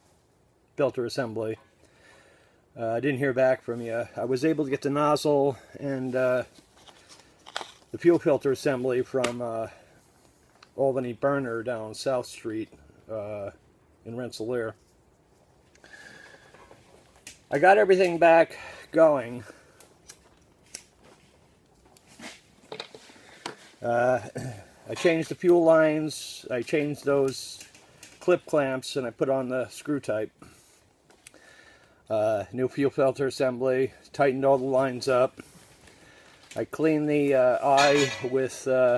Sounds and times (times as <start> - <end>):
Speech: 0.8 - 1.6, 2.8 - 6.5, 8.0 - 9.8, 10.8 - 14.8, 17.5 - 19.5, 23.8 - 30.4, 32.1 - 35.4, 36.6 - 38.9.